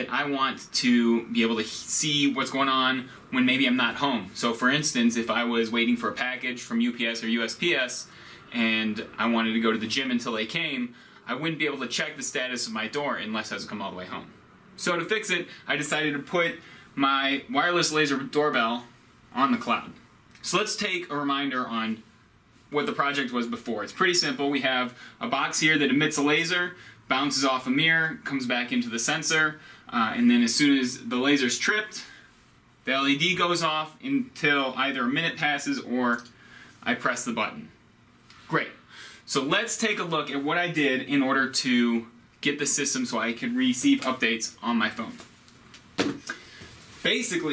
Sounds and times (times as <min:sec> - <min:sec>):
Speech: 0:00.0 - 0:22.1, 0:22.7 - 0:32.2, 0:32.8 - 0:37.8, 0:38.5 - 0:45.3, 0:47.0 - 0:47.5.